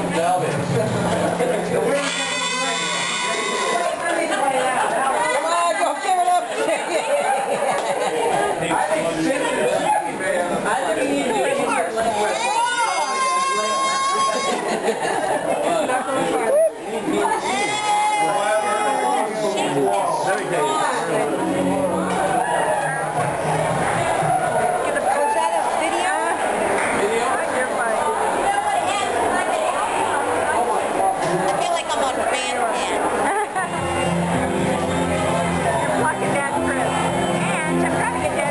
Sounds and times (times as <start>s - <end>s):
Speech: 0.0s - 23.2s, 34.4s - 38.5s
Inside, public space: 0.0s - 38.5s
Music: 20.8s - 25.6s, 33.6s - 38.5s.